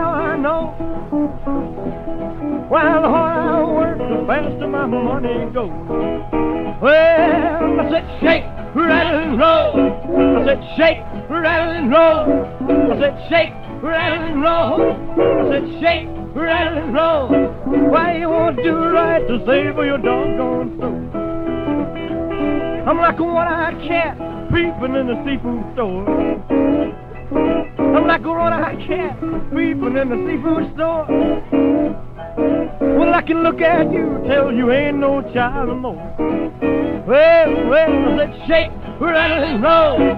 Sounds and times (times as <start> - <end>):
Music: 0.0 - 40.1.